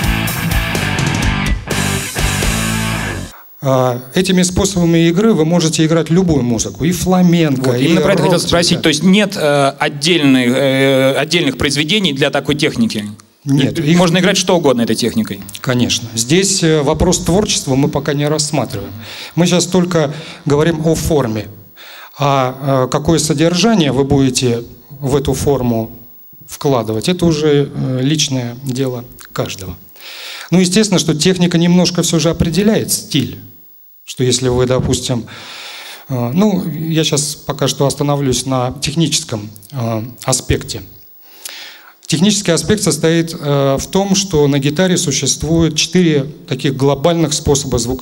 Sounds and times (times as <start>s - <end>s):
Speech: 3.6s - 21.6s, 22.2s - 29.8s, 30.5s - 33.5s, 34.1s - 35.3s, 36.1s - 41.0s, 42.1s - 48.0s.